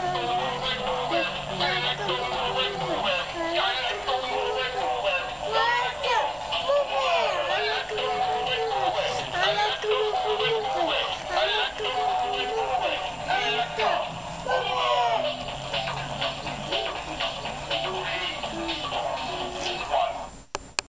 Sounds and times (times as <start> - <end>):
Music: 0.0 - 20.5.